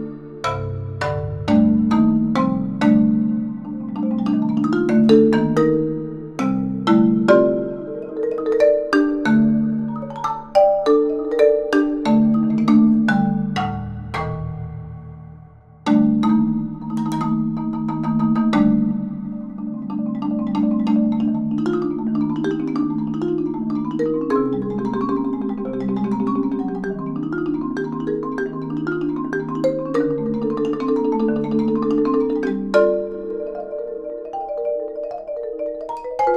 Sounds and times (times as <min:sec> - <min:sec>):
Marimba, xylophone: 0:00.0 - 0:36.3.